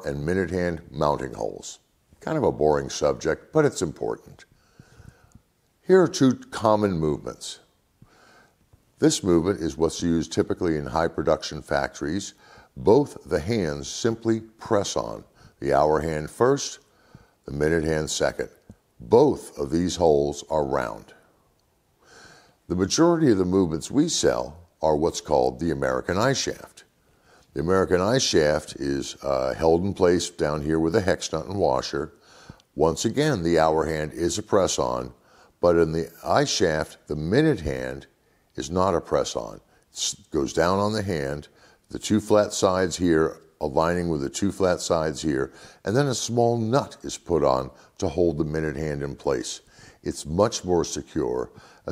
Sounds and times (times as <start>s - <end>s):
Speech: 0.0s - 4.5s, 5.8s - 7.7s, 9.0s - 21.3s, 22.7s - 26.9s, 27.5s - 32.2s, 32.8s - 51.9s.